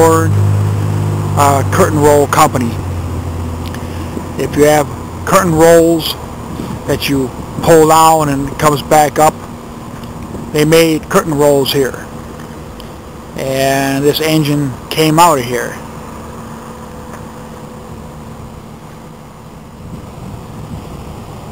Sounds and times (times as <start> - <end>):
Speech: 0.0 - 0.3, 1.4 - 2.8, 4.4 - 6.2, 6.9 - 9.4, 10.6 - 12.1, 13.4 - 15.8.